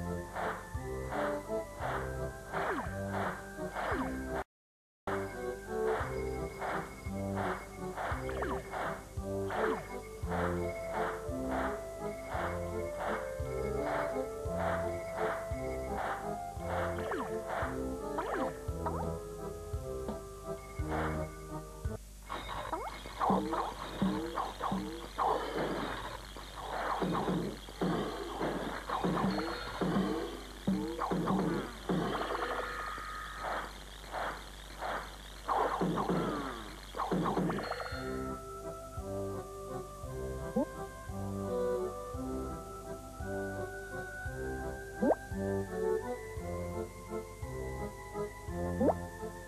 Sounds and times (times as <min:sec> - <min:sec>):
Music: 0:00.0 - 0:04.5, 0:05.1 - 0:34.0, 0:35.2 - 0:49.4.